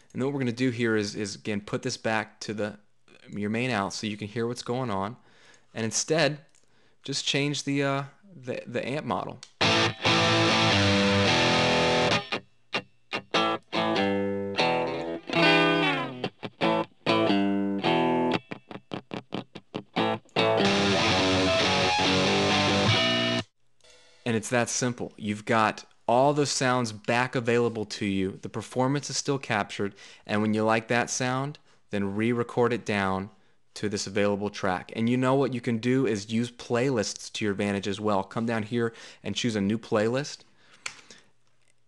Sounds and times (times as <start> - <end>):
Speech: 0.1 - 5.2, 5.8 - 9.4, 24.2 - 40.4
Distortion: 5.8 - 41.8
Effects unit: 9.5 - 23.5
Music: 9.6 - 24.2.